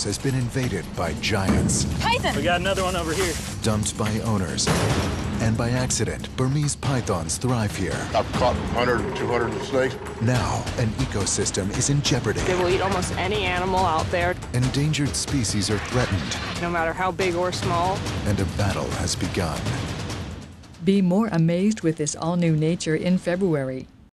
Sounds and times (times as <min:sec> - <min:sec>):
Music: 0:00.0 - 0:24.1
Speech: 0:05.4 - 0:16.1.